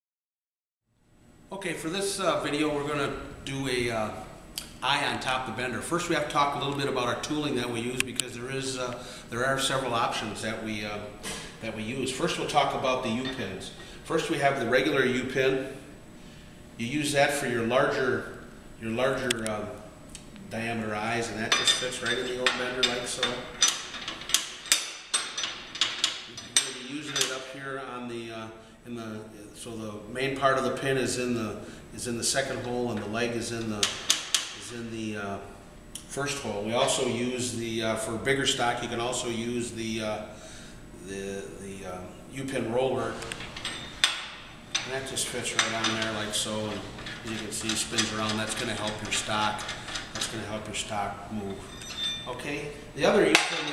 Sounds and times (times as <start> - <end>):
Speech: 1.5 - 4.2, 4.8 - 15.8, 16.8 - 19.8, 20.5 - 23.5, 26.4 - 33.9, 34.6 - 40.3, 41.0 - 43.3, 44.8 - 51.6, 52.3 - 53.7.